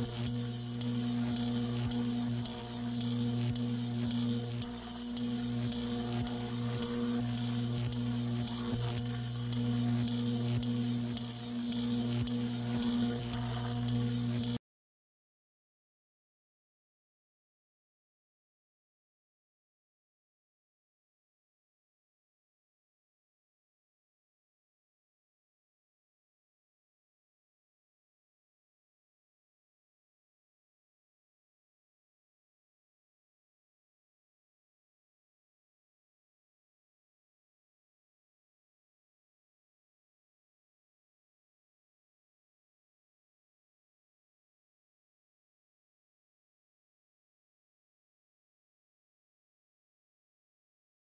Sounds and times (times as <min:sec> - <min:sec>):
Music: 0:00.0 - 0:14.6.